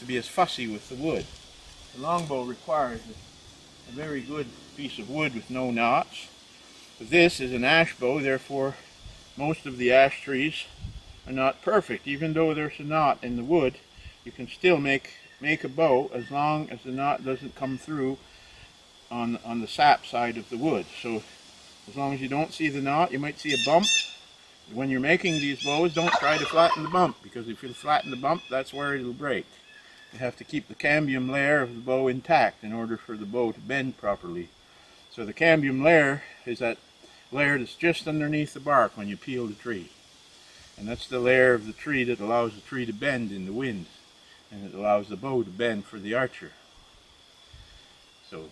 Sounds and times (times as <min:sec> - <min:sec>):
Speech: 0:00.0 - 0:01.3, 0:02.0 - 0:03.2, 0:03.9 - 0:06.3, 0:07.0 - 0:08.8, 0:09.4 - 0:10.7, 0:11.3 - 0:18.2, 0:19.1 - 0:21.2, 0:21.9 - 0:23.9, 0:24.7 - 0:29.4, 0:30.2 - 0:34.5, 0:35.2 - 0:36.8, 0:37.4 - 0:39.9, 0:40.8 - 0:43.9, 0:44.5 - 0:46.6, 0:48.3 - 0:48.5.